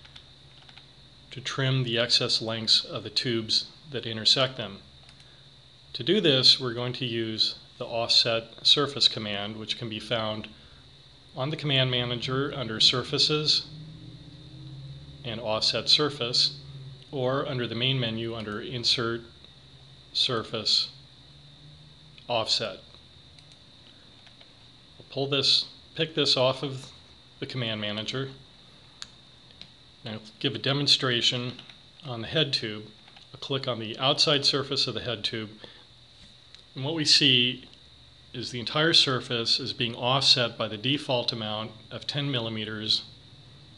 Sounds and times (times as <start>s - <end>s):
Speech: 1.3s - 4.9s, 5.9s - 10.6s, 11.3s - 13.7s, 15.2s - 19.4s, 20.1s - 21.0s, 22.2s - 22.9s, 25.0s - 28.4s, 30.0s - 35.6s, 36.8s - 43.2s.